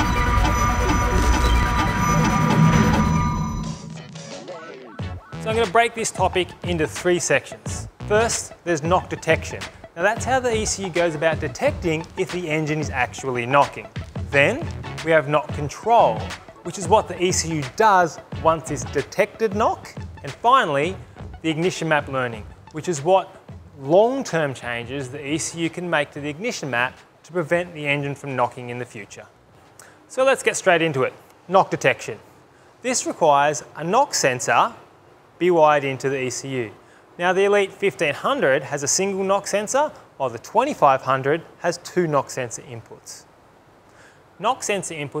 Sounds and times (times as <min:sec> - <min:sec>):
Music: 0:00.0 - 0:27.1
Speech: 0:04.4 - 0:29.3, 0:30.1 - 0:32.2, 0:32.8 - 0:34.8, 0:35.4 - 0:43.3, 0:44.4 - 0:45.2.